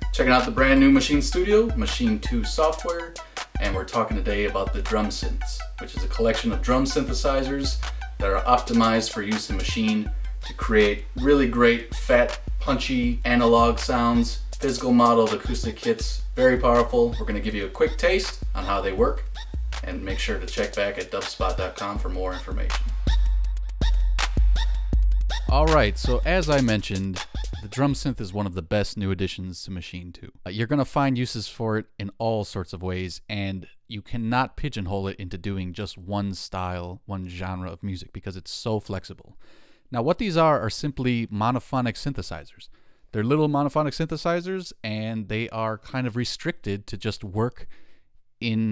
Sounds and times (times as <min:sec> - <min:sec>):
Speech: 0:00.0 - 0:19.2, 0:19.8 - 0:22.8, 0:25.5 - 0:47.7, 0:48.4 - 0:48.7
Music: 0:00.0 - 0:28.4.